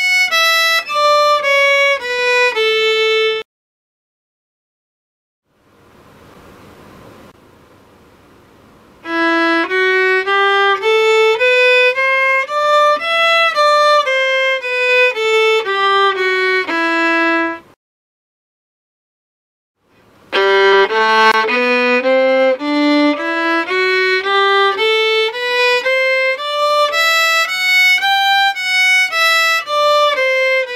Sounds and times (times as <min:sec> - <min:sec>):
Violin, fiddle: 0:00.0 - 0:03.4, 0:09.0 - 0:17.7, 0:20.3 - 0:30.7.